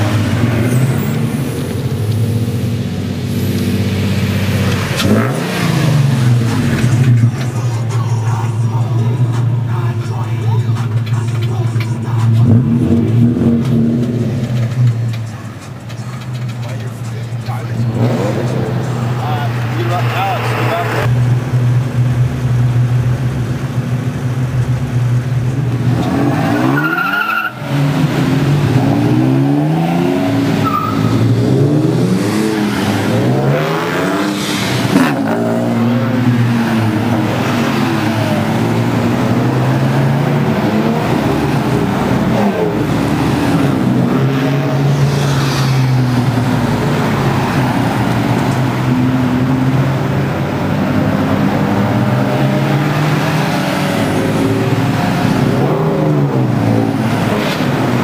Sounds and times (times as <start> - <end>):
Outside, urban or manmade: 0.0 - 58.0
Car passing by: 44.6 - 47.9.